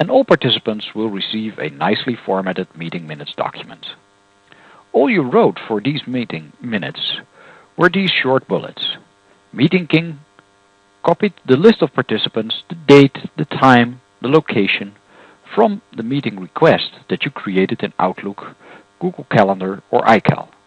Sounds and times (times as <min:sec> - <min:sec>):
Speech: 0:00.0 - 0:04.0, 0:04.9 - 0:10.3, 0:11.0 - 0:20.6.